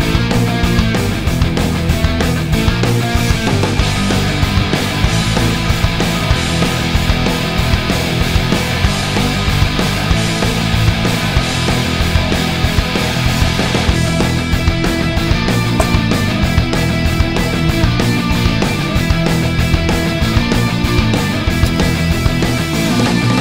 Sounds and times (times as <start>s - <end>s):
Music: 0.0s - 23.4s.